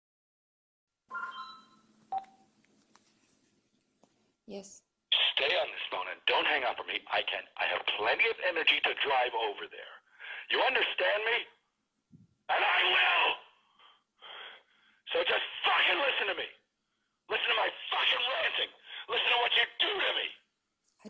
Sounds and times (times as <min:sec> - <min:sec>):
Speech: 0:04.5 - 0:11.6, 0:12.5 - 0:13.5, 0:15.1 - 0:16.6, 0:17.3 - 0:20.4.